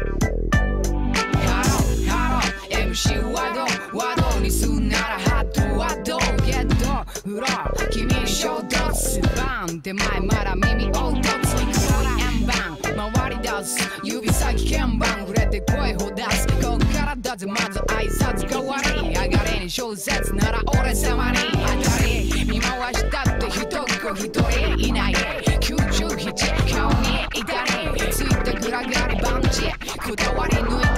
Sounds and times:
Pop music: 0.0 - 30.9.

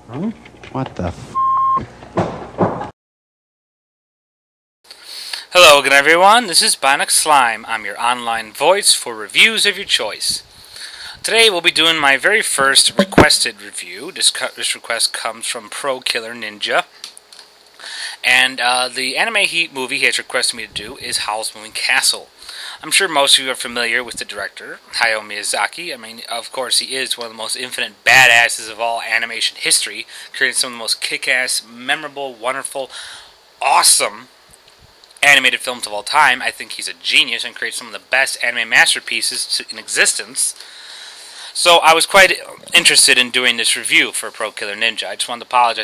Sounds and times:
Speech: 0.1 - 1.2, 5.5 - 10.4, 11.2 - 16.9, 18.2 - 32.9, 33.6 - 34.3, 35.2 - 40.6, 41.6 - 45.8.

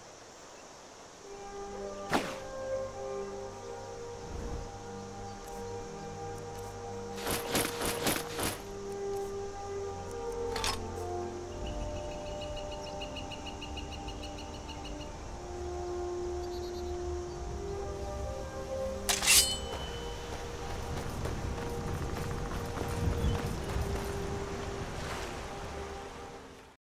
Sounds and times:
Music: 1.1 - 26.8.

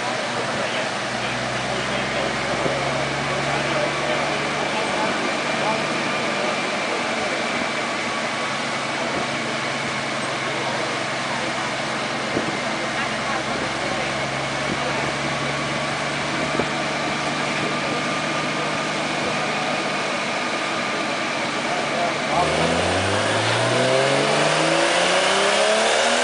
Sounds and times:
Speech: 0.0 - 7.8, 8.4 - 22.8
Car: 0.0 - 26.2.

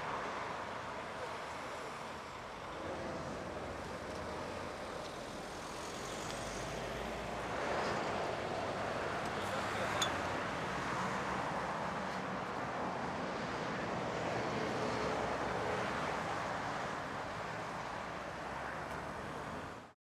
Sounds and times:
Vehicle: 0.0 - 20.0.

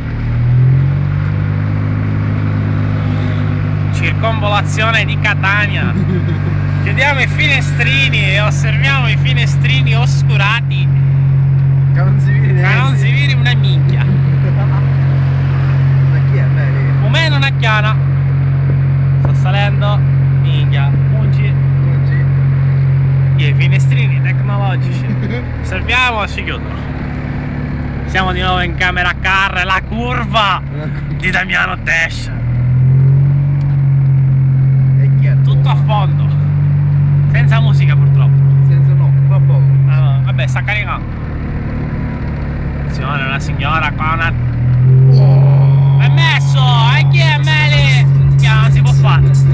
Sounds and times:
Car: 0.0 - 49.5
Speech: 4.0 - 6.0, 6.9 - 10.9, 12.0 - 14.8, 16.1 - 18.0, 19.3 - 22.3, 23.4 - 26.8, 28.1 - 32.4, 35.0 - 36.4, 37.3 - 41.0, 42.9 - 44.4, 45.1 - 49.5.

